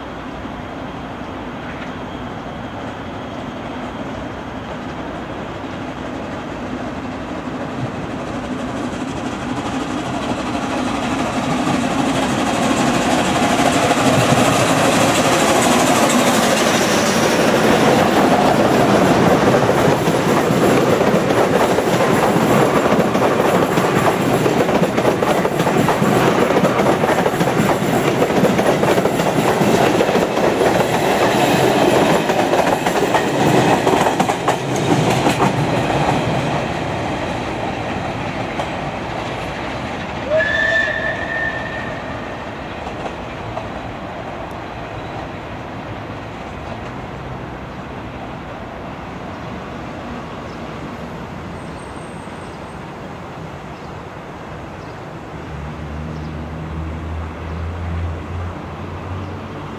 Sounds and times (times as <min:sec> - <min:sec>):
Railroad car, train wagon: 0:00.0 - 0:59.7
Train: 0:00.0 - 0:59.7.